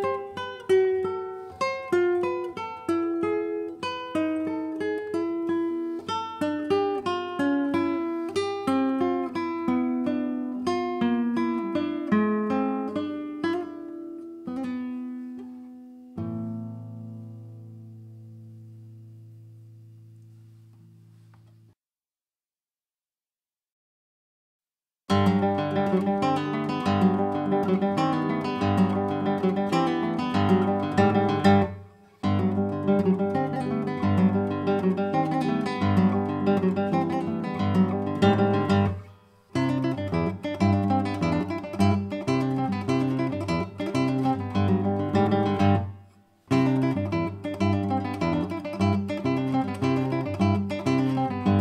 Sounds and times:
Guitar: 0.0s - 21.8s, 25.1s - 51.6s.

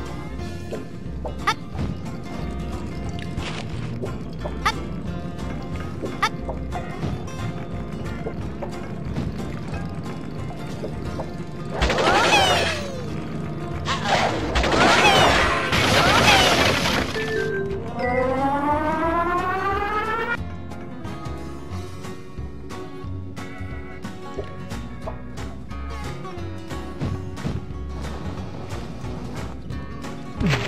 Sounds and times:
Music: 0.0s - 30.6s.

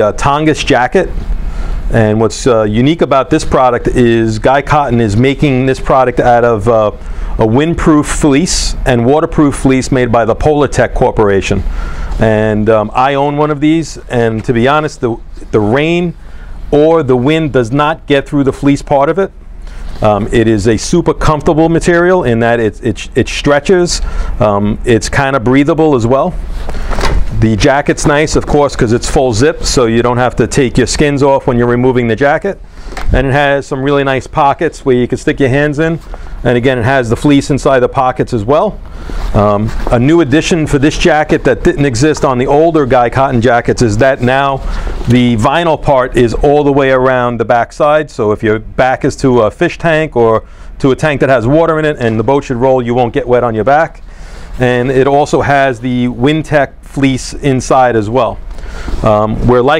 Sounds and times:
Speech: 0.0s - 1.2s, 1.9s - 11.6s, 12.2s - 19.4s, 20.0s - 26.4s, 27.3s - 54.0s, 54.6s - 58.4s, 59.0s - 59.7s.

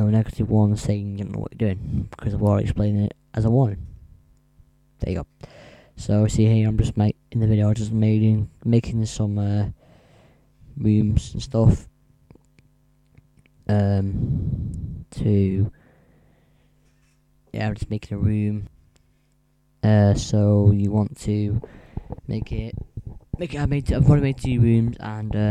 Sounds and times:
Speech: 0.0s - 3.9s, 5.0s - 5.3s, 6.0s - 9.8s, 10.8s - 11.9s, 13.6s - 14.2s, 15.1s - 15.8s, 17.5s - 18.7s, 19.8s - 21.6s, 22.3s - 22.8s, 23.4s - 25.5s.

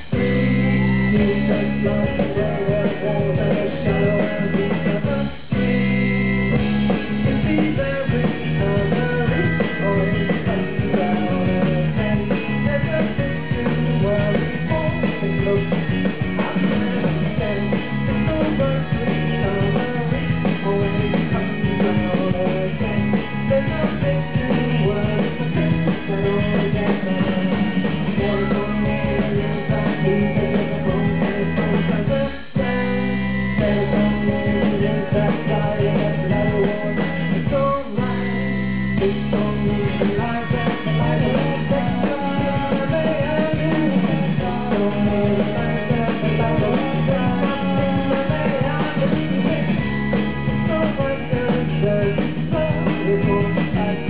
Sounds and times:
Music: 0.0s - 54.0s.

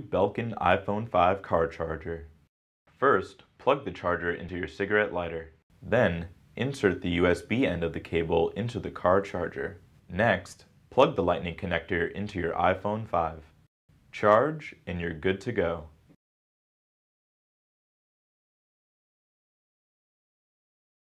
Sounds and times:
Speech: 0.0s - 2.4s, 3.0s - 13.5s, 14.2s - 16.0s.

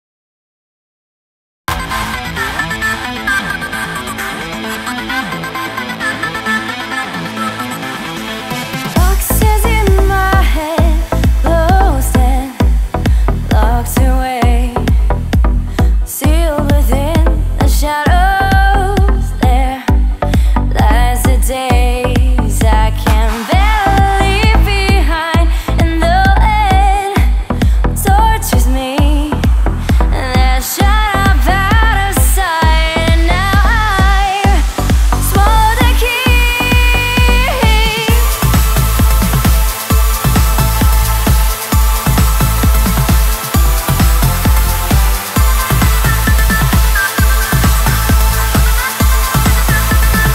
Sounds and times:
Music: 1.7s - 50.3s.

